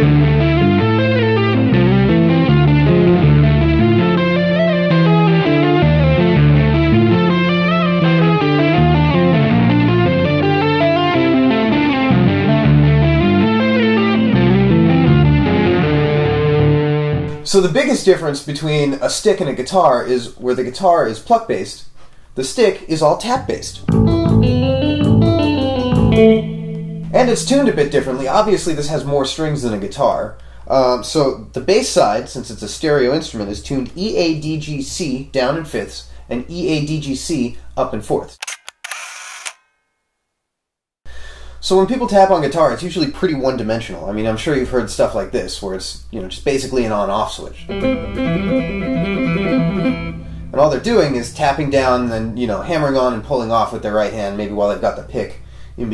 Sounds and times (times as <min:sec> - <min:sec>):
Tapping (guitar technique): 0:00.0 - 0:16.2, 0:23.4 - 0:28.7, 0:47.6 - 0:52.5
Bass guitar: 0:00.0 - 0:17.5, 0:23.4 - 0:29.0, 0:47.5 - 0:53.6
Blues: 0:00.0 - 0:17.5, 0:23.4 - 0:28.9, 0:47.6 - 0:53.0
Speech: 0:17.4 - 0:23.9, 0:27.2 - 0:38.4, 0:41.6 - 0:47.7, 0:50.5 - 0:55.9.